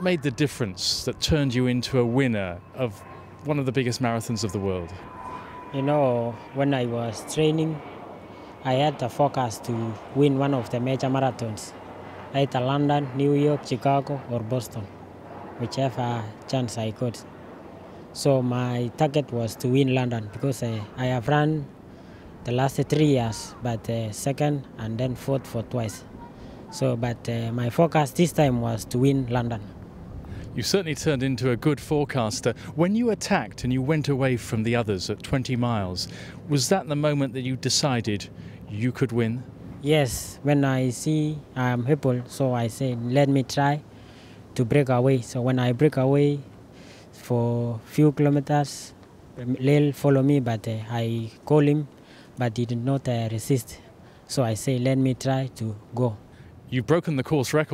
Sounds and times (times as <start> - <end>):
Speech: 0.0 - 5.0, 5.7 - 7.8, 8.6 - 14.9, 15.6 - 17.2, 18.2 - 21.7, 22.5 - 29.7, 30.5 - 43.8, 44.6 - 46.5, 47.2 - 57.7
Outside, urban or manmade: 0.0 - 57.7.